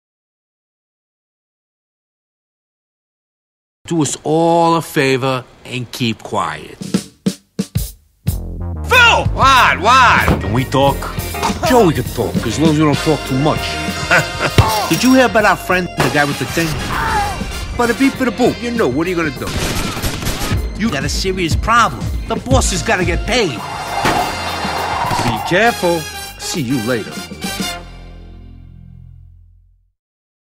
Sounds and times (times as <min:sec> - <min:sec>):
Speech: 0:03.9 - 0:06.9, 0:08.9 - 0:13.7, 0:14.9 - 0:17.2, 0:17.8 - 0:19.5, 0:20.8 - 0:23.6, 0:25.2 - 0:27.2
Music: 0:06.8 - 0:30.0.